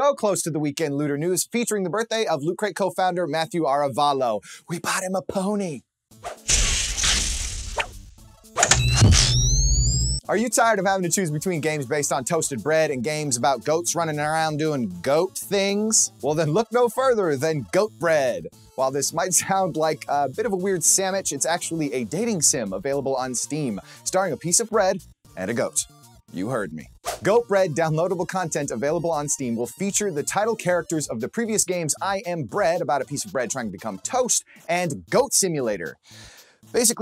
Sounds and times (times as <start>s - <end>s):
Speech: 0.0s - 5.8s, 10.2s - 36.0s, 36.8s - 37.0s.